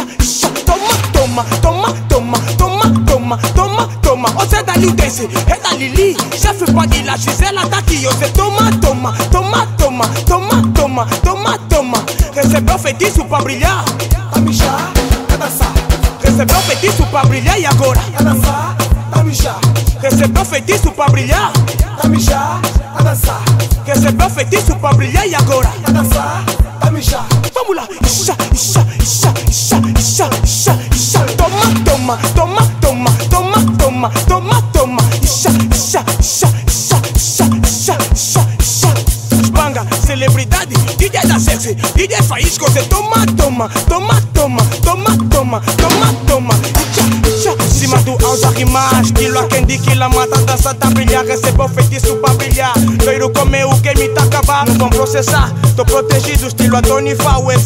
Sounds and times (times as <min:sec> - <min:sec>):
Afrobeat: 0:00.0 - 0:57.6
House music: 0:00.0 - 0:57.6.